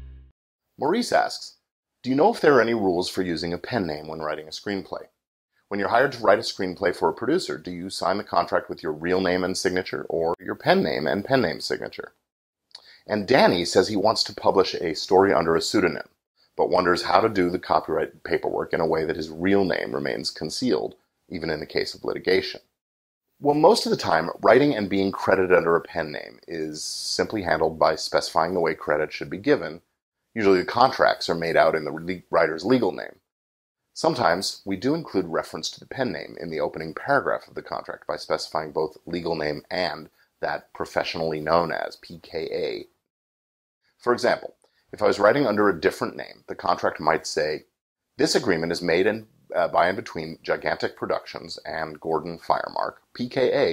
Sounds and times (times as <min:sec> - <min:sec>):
Speech: 0:00.8 - 0:12.2, 0:12.8 - 0:22.8, 0:23.4 - 0:33.3, 0:34.0 - 0:43.0, 0:44.0 - 0:53.7.